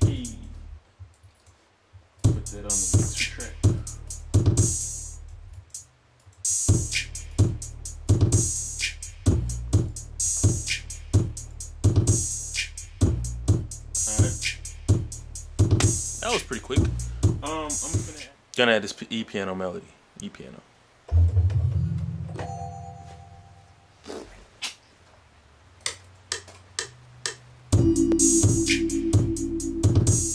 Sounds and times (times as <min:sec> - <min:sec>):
Speech: 0:00.0 - 0:00.6, 0:02.3 - 0:03.6, 0:14.0 - 0:14.4, 0:16.2 - 0:20.7
Rhythm and blues: 0:00.0 - 0:01.3, 0:01.9 - 0:18.3, 0:25.8 - 0:30.3.